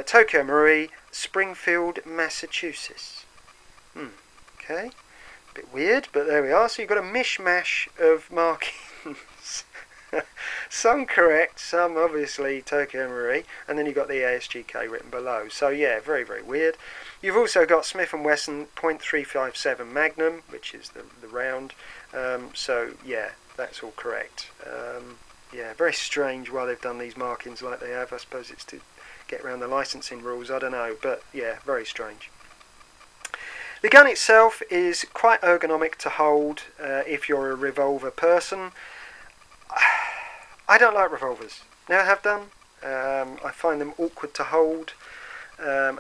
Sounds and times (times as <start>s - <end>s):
Speech: 0.0s - 3.3s, 4.0s - 5.0s, 5.6s - 9.7s, 10.7s - 32.3s, 33.8s - 38.8s, 39.8s - 45.0s, 45.6s - 46.0s.